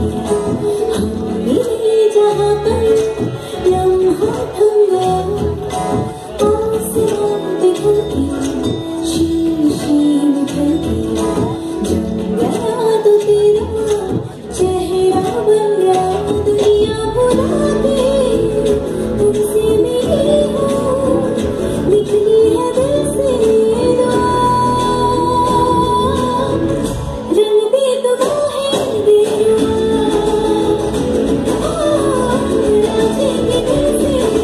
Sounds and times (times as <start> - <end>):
Music: 0.0 - 34.4.